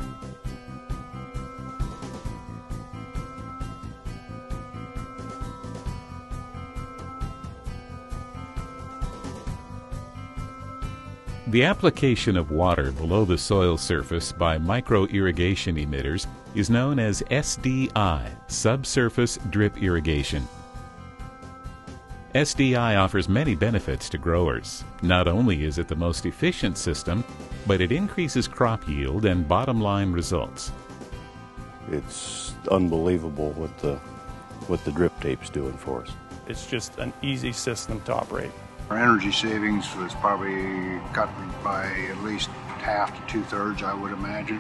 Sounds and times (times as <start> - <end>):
Music: 0.0 - 44.6
Speech: 11.5 - 20.5, 22.4 - 30.7, 31.9 - 34.0, 34.7 - 44.6.